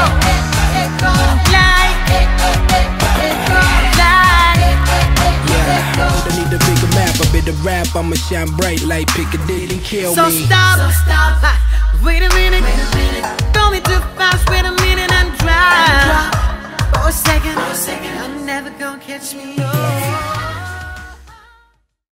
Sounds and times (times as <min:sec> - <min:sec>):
Music: 0:00.0 - 0:22.0
Echo: 0:05.0 - 0:13.6.